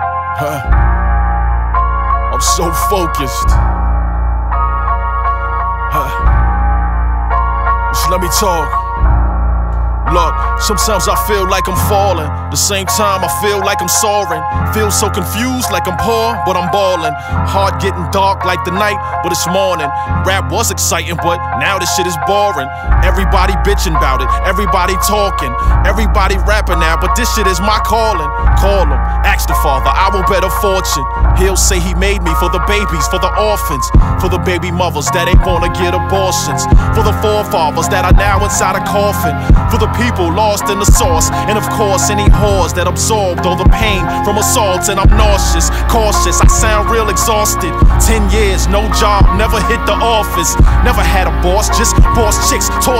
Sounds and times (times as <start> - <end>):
Music: 0.0 - 52.9.